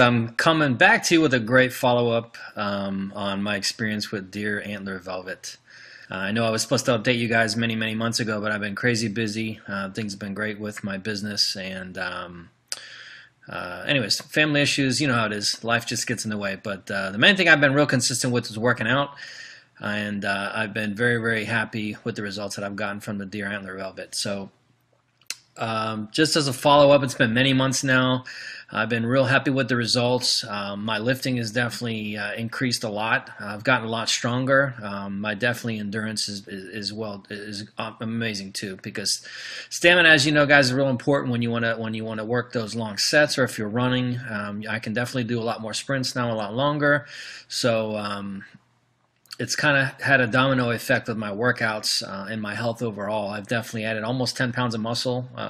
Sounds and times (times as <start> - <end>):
Speech: 0.0 - 12.6, 13.5 - 24.6, 25.3 - 48.6, 49.3 - 55.5.